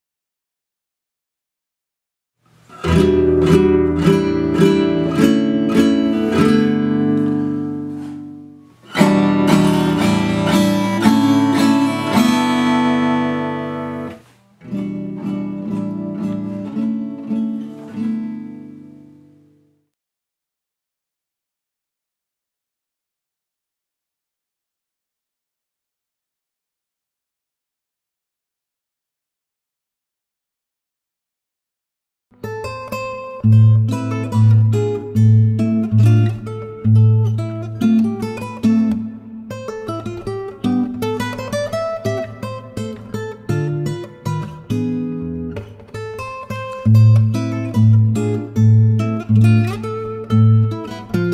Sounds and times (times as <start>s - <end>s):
Guitar: 2.4s - 20.0s, 32.3s - 51.3s.